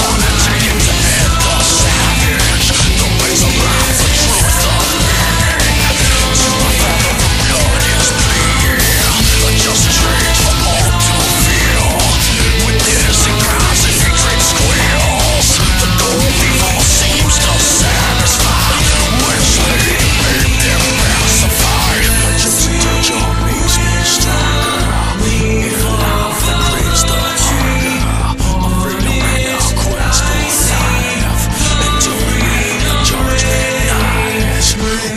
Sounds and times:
Soundtrack music: 0.0 - 35.1.

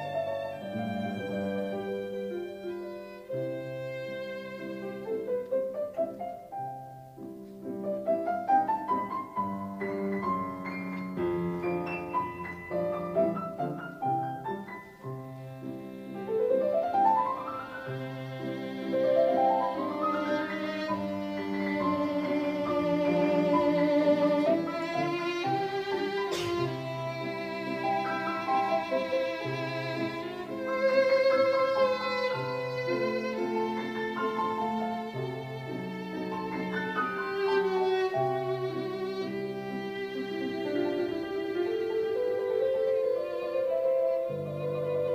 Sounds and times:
Cello: 0.0 - 45.1.

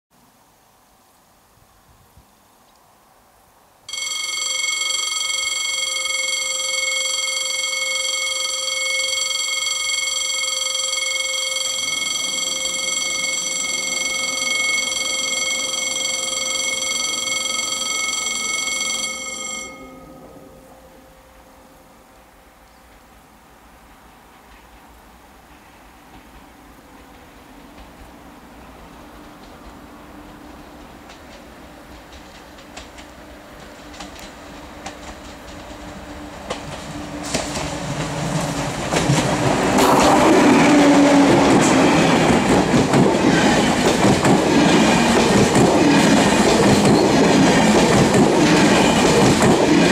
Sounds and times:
Train: 1.5 - 49.9
Railroad car, train wagon: 3.8 - 49.9.

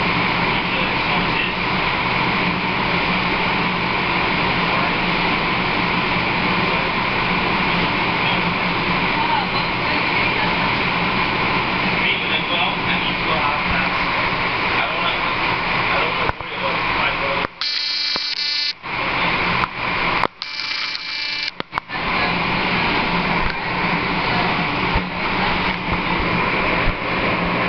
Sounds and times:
Outside, urban or manmade: 0.0 - 27.6
Speech: 0.5 - 1.6, 8.2 - 10.8, 12.0 - 17.5, 21.8 - 22.6.

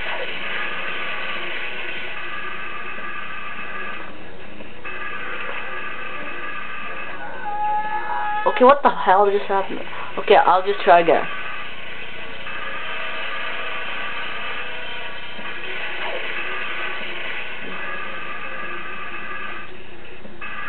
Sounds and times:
Speech: 8.5 - 11.3.

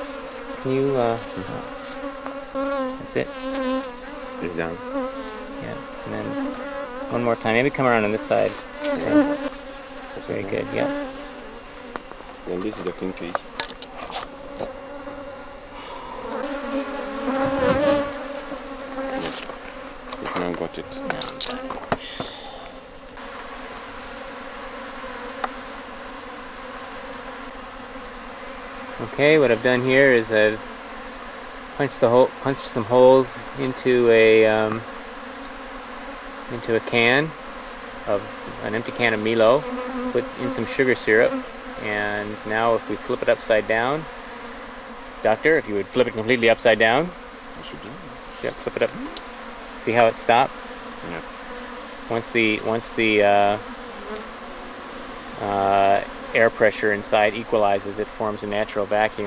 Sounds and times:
Bee, wasp, etc.: 0.0 - 59.2
Fly, housefly: 0.0 - 59.2.

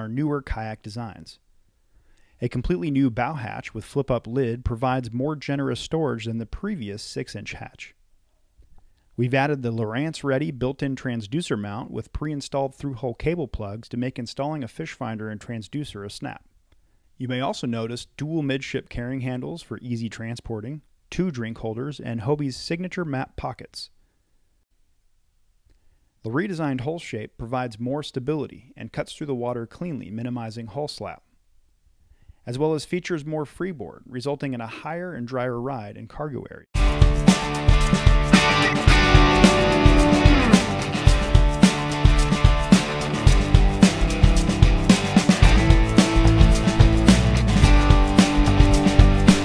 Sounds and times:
Speech: 0.0 - 1.4, 2.4 - 8.0, 9.2 - 16.5, 17.2 - 24.0, 26.2 - 31.3, 32.4 - 36.7.

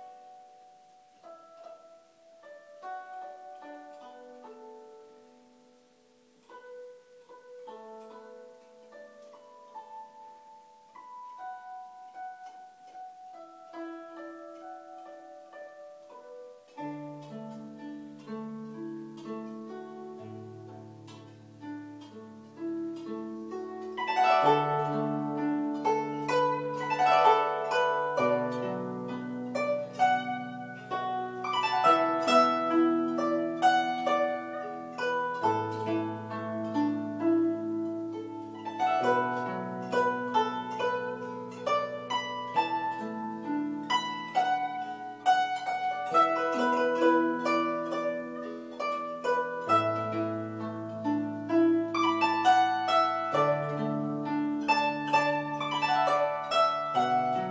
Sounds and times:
Zither: 0.0 - 57.5.

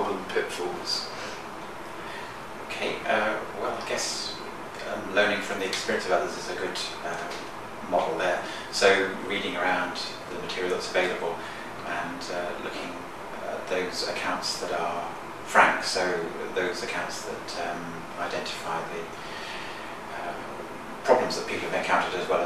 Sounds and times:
Speech: 0.0 - 1.4, 2.7 - 19.2, 20.1 - 22.4.

